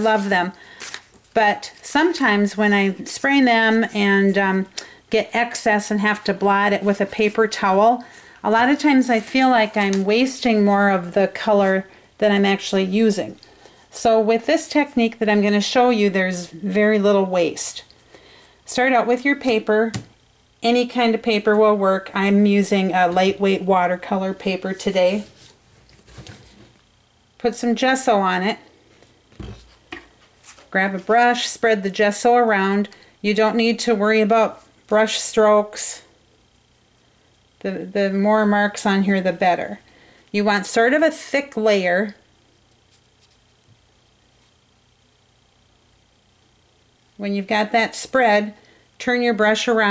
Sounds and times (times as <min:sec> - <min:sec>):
Speech: 0:00.0 - 0:00.6, 0:01.4 - 0:13.4, 0:14.0 - 0:17.9, 0:18.7 - 0:20.0, 0:20.6 - 0:25.3, 0:27.4 - 0:28.6, 0:30.7 - 0:36.1, 0:37.6 - 0:39.8, 0:40.4 - 0:42.2, 0:47.2 - 0:49.9.